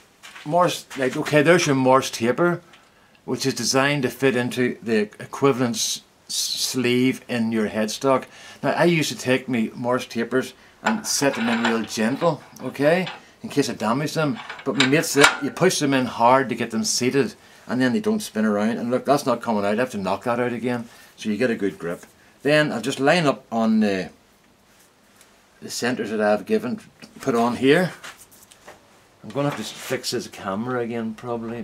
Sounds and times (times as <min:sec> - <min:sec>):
Speech: 0:00.4 - 0:02.7, 0:03.3 - 0:24.2, 0:25.6 - 0:28.1, 0:29.2 - 0:31.6
Tools: 0:10.9 - 0:13.3, 0:14.3 - 0:15.6.